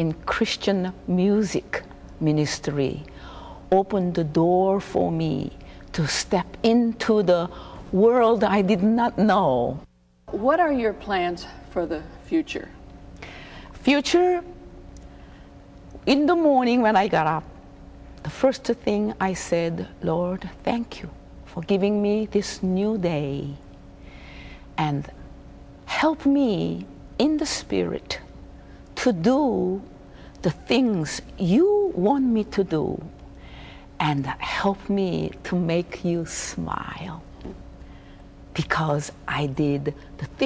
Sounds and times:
Speech: 0.0s - 3.1s, 3.8s - 12.8s, 13.8s - 14.5s, 16.1s - 17.5s, 18.3s - 23.6s, 25.9s - 28.3s, 29.0s - 33.1s, 34.0s - 37.3s, 38.6s - 40.4s.

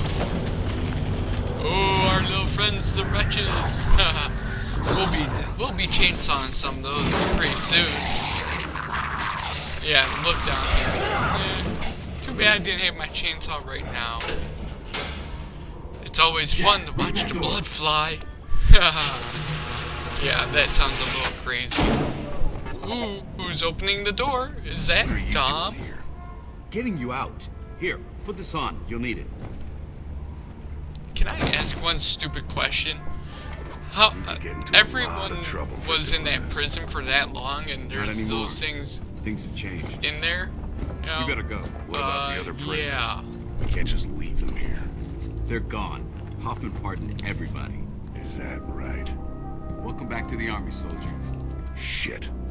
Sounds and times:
Speech: 1.6s - 8.5s, 9.8s - 14.4s, 16.0s - 19.3s, 20.2s - 21.8s, 22.8s - 26.0s, 31.2s - 33.0s, 33.9s - 44.9s, 45.5s - 49.2s, 49.8s - 51.2s, 51.8s - 52.3s.

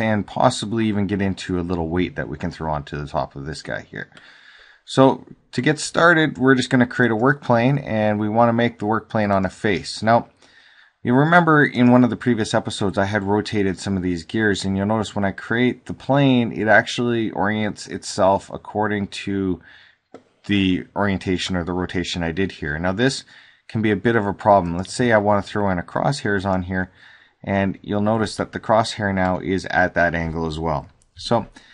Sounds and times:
Speech: 0.0s - 4.2s, 4.9s - 10.4s, 11.0s - 19.7s, 20.4s - 31.6s.

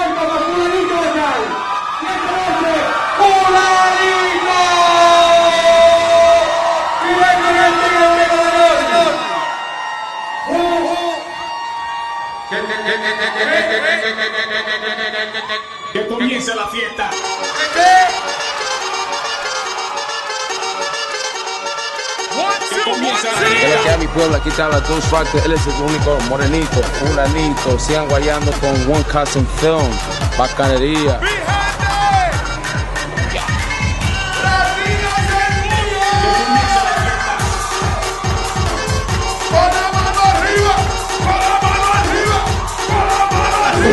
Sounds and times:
Disco: 17.2s - 43.9s.

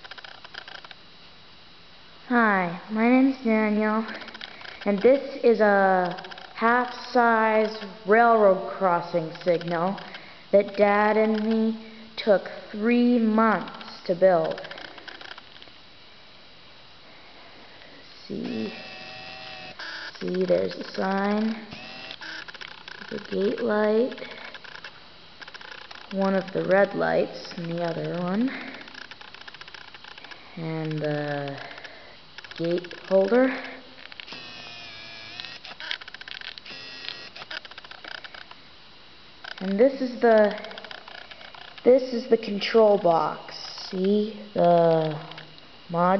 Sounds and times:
Speech: 2.3s - 4.2s, 4.8s - 14.6s, 18.2s - 18.8s, 20.2s - 21.7s, 23.1s - 24.3s, 26.2s - 28.7s, 30.6s - 31.7s, 32.6s - 33.8s, 39.6s - 40.7s, 41.9s - 45.3s, 45.9s - 46.2s.

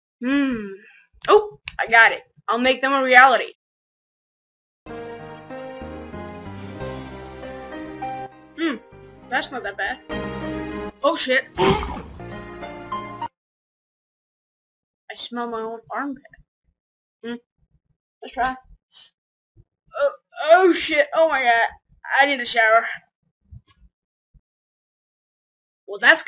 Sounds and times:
Child speech, kid speaking: 1.3s - 3.5s, 15.1s - 16.2s, 18.2s - 18.6s, 20.0s - 23.0s, 25.9s - 26.2s
Music: 4.9s - 13.4s.

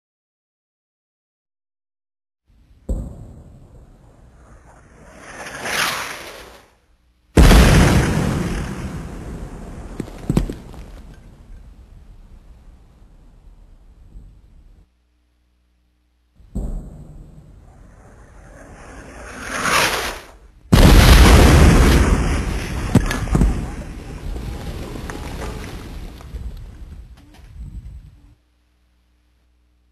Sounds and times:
Artillery fire: 2.9s - 6.6s, 7.4s - 11.1s, 16.5s - 26.1s.

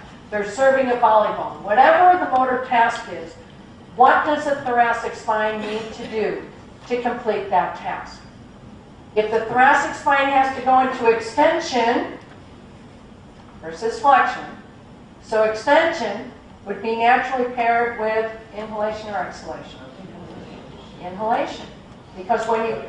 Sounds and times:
Female speech, woman speaking: 0.3s - 3.4s, 4.0s - 8.3s, 9.2s - 12.2s, 13.6s - 14.6s, 15.2s - 22.8s.

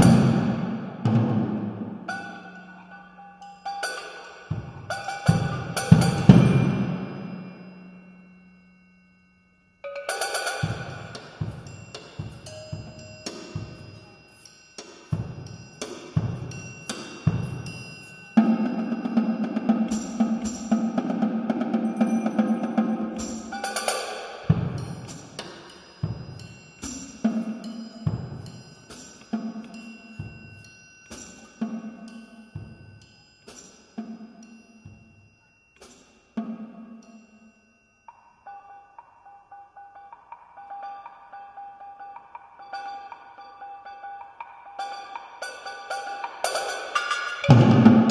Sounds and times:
Drum: 0.0s - 2.1s, 4.5s - 7.2s, 10.4s - 14.1s, 15.1s - 30.5s, 46.6s - 48.1s
Drum kit: 0.0s - 2.1s, 4.5s - 7.2s, 10.3s - 14.0s, 15.1s - 29.3s, 46.5s - 48.1s.

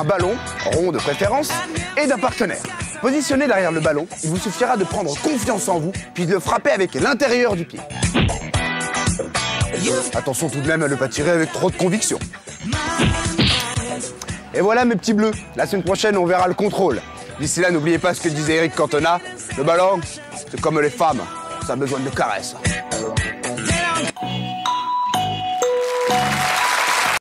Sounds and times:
Speech: 0.0s - 7.8s, 9.8s - 12.2s, 14.6s - 23.2s
Music: 0.0s - 27.2s.

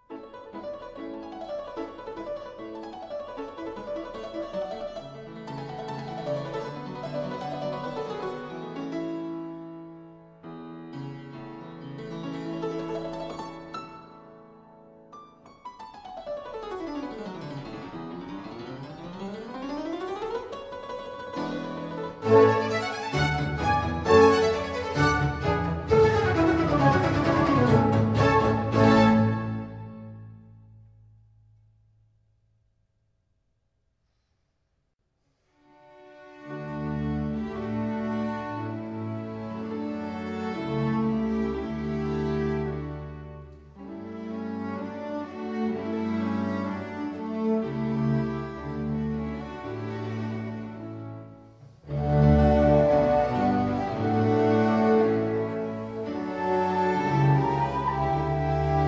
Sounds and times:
Harpsichord: 0.0s - 30.8s
Piano: 0.0s - 31.1s, 35.8s - 58.8s.

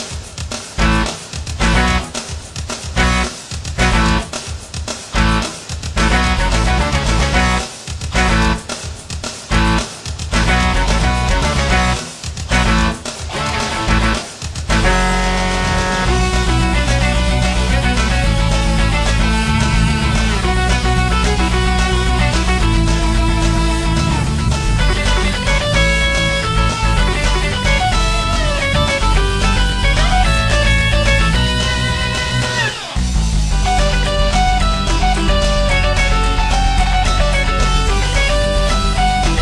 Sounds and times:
Electric guitar: 0.0s - 4.5s, 5.1s - 8.8s, 9.5s - 39.4s.

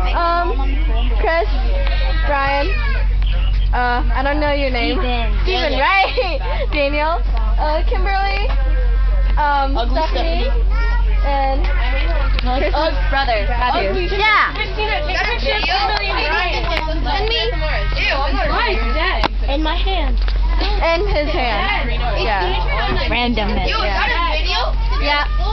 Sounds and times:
Bus: 0.0s - 25.5s.

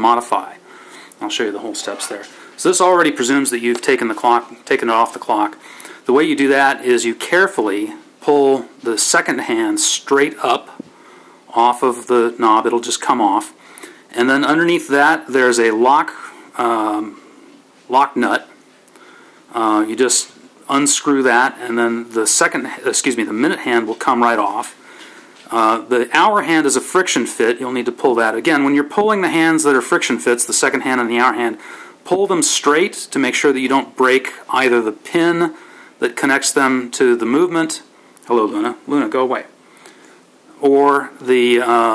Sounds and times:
Speech: 0.0s - 0.6s, 1.2s - 10.8s, 11.5s - 17.2s, 17.9s - 18.6s, 19.5s - 24.8s, 25.5s - 39.6s, 40.6s - 41.9s.

